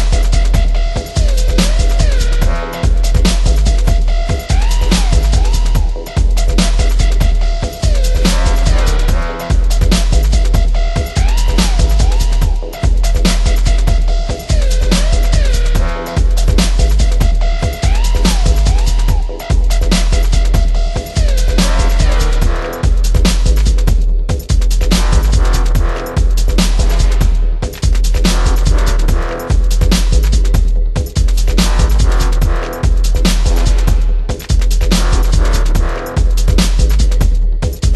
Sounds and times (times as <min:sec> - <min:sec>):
Music: 0:00.0 - 0:37.9.